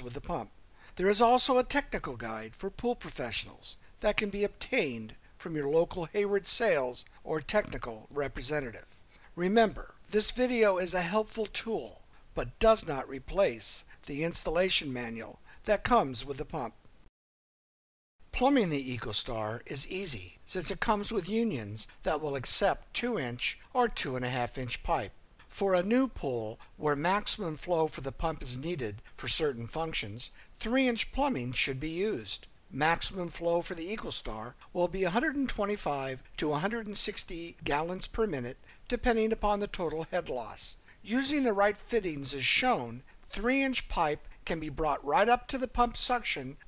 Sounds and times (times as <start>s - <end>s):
Speech: 0.0s - 16.8s, 18.3s - 46.6s.